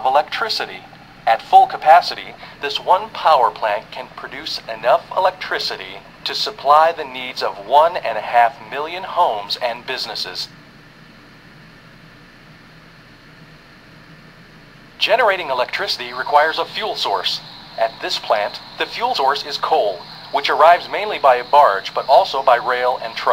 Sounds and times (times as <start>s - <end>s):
Speech: 0.0s - 10.5s, 15.0s - 23.3s.